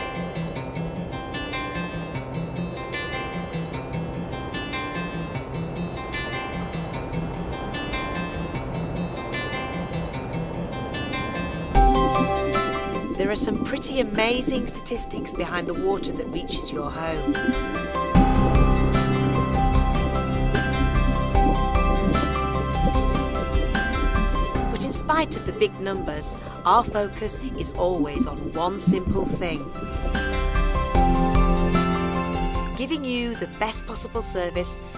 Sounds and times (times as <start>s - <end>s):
Music: 0.0s - 34.9s
Gurgling: 11.8s - 31.0s
Speech: 13.2s - 17.3s, 24.7s - 29.7s, 32.8s - 34.8s.